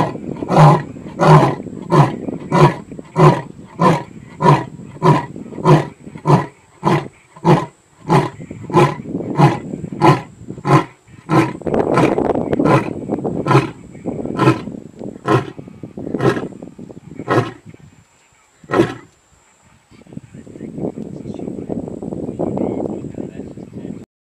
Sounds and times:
Roar: 0.0s - 13.8s, 14.4s - 15.6s, 16.2s - 16.5s, 17.2s - 17.7s, 18.7s - 19.1s
Speech: 19.9s - 24.1s.

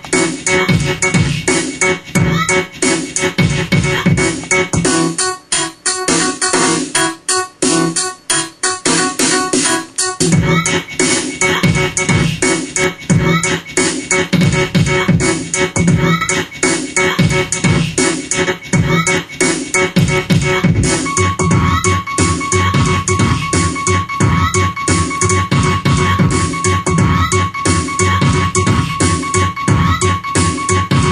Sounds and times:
Music: 0.0s - 31.1s.

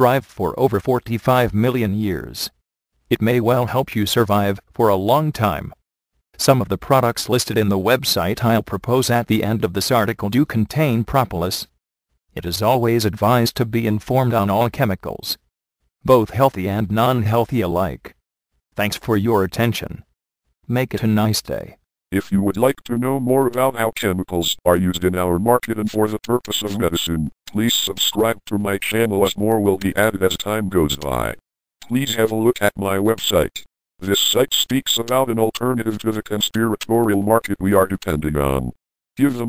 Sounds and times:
Speech: 0.0s - 5.8s, 6.4s - 18.2s, 18.8s - 20.1s, 20.7s - 39.4s.

